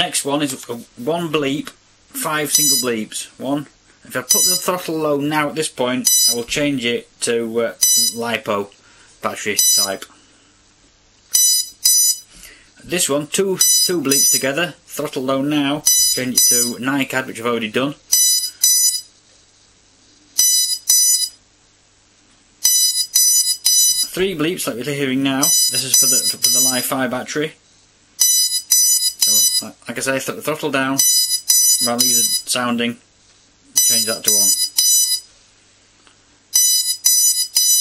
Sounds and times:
Speech: 0.0 - 10.1, 12.8 - 18.0, 24.1 - 27.6, 29.6 - 31.0, 31.8 - 33.0, 33.8 - 34.6.

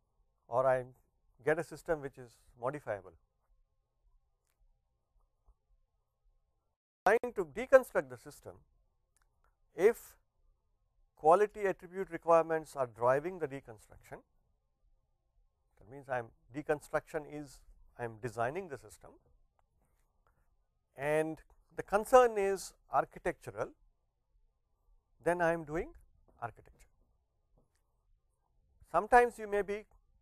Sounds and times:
Speech: 0.5 - 3.2, 7.1 - 8.6, 9.8 - 10.2, 11.2 - 14.3, 15.8 - 19.2, 21.0 - 23.8, 25.2 - 26.9, 28.9 - 29.9.

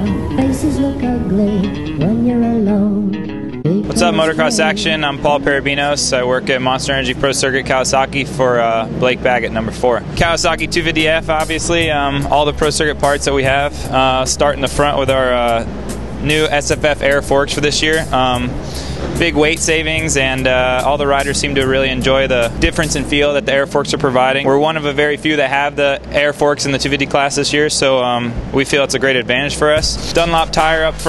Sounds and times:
Music: 0.0 - 8.2, 10.0 - 31.0
Speech: 3.7 - 18.6, 19.2 - 31.0.

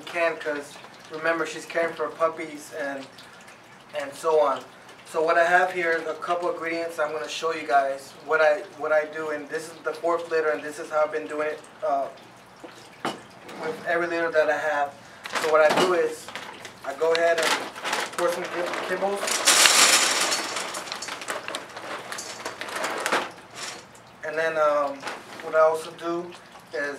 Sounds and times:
Speech: 0.0 - 3.1, 3.9 - 12.2, 13.6 - 19.4, 24.2 - 26.9.

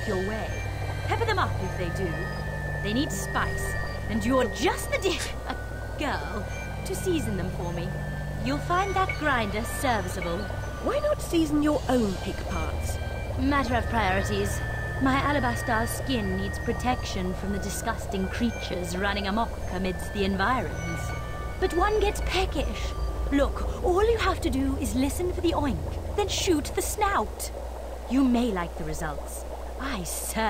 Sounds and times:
Music: 0.0 - 26.8
Speech: 0.0 - 27.5, 28.1 - 30.4.

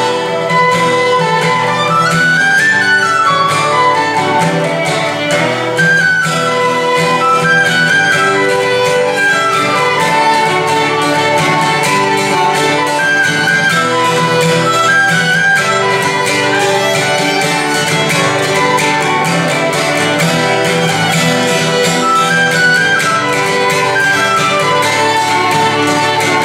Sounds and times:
Guitar: 0.0 - 26.4
Violin, fiddle: 0.0 - 26.4.

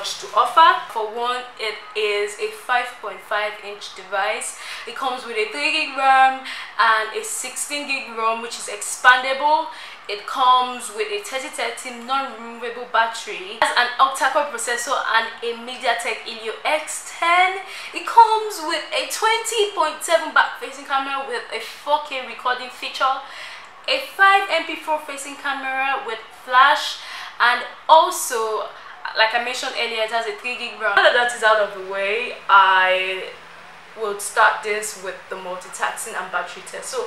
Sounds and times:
Speech: 0.0 - 33.4, 34.0 - 37.0.

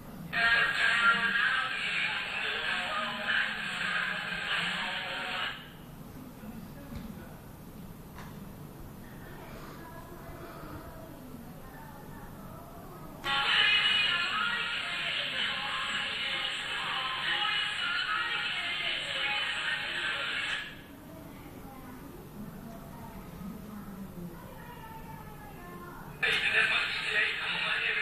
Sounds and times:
Radio: 0.4 - 5.7, 13.2 - 20.8, 26.2 - 28.0.

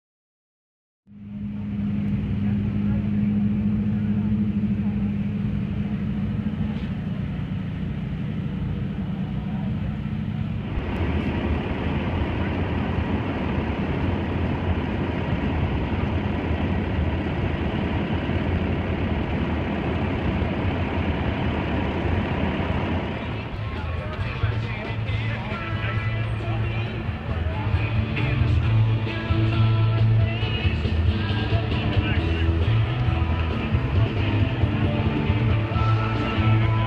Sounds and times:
Vehicle: 1.1 - 36.8
Speech: 2.2 - 10.5, 23.1 - 28.4.

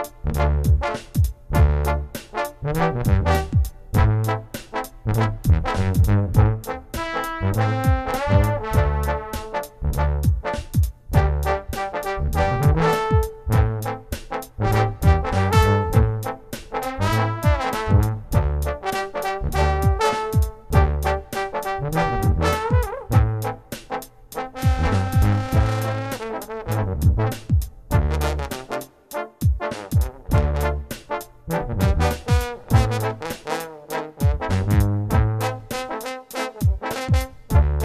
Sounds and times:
Brass instrument: 0.0 - 37.8
Jazz: 0.0 - 37.8.

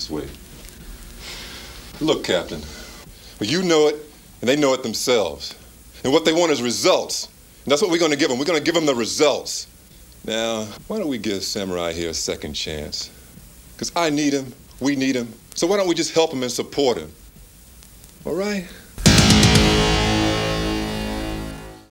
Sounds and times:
Male speech, man speaking: 0.0 - 0.4, 2.0 - 2.8, 3.4 - 13.2, 13.8 - 17.2, 18.2 - 18.8
Narration, monologue: 0.0 - 19.0
Music: 19.0 - 21.9.

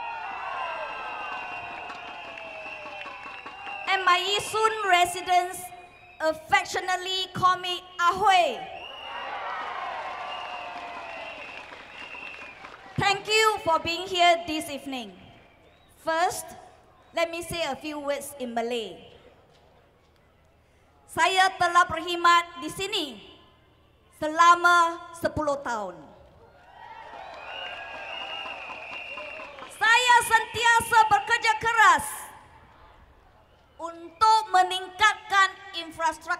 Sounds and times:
Female speech, woman speaking: 3.9 - 8.7, 13.0 - 15.2, 16.0 - 16.6, 17.2 - 19.1, 21.1 - 23.3, 24.2 - 26.1, 29.8 - 32.4, 33.8 - 36.4
Narration, monologue: 13.0 - 15.3.

